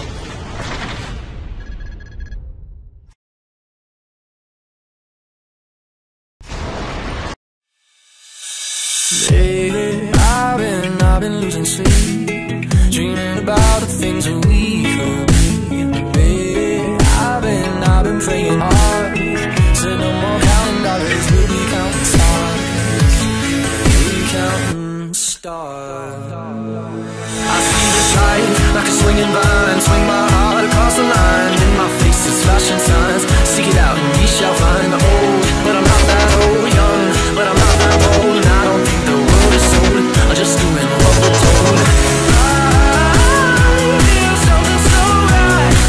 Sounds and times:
Music: 8.4s - 45.8s.

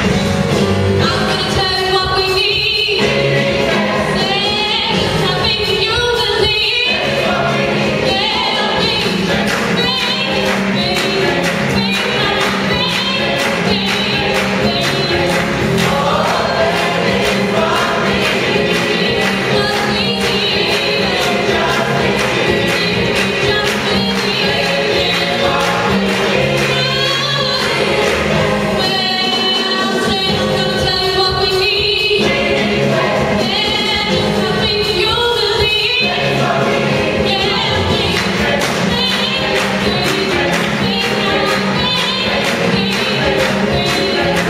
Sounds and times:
Choir: 2.2s - 44.4s.

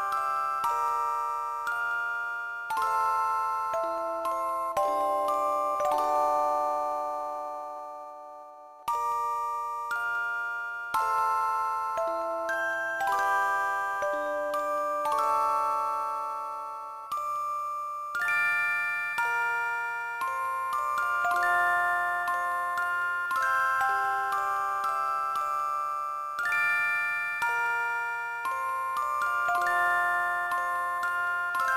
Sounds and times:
Jingle (music): 0.0s - 31.7s.

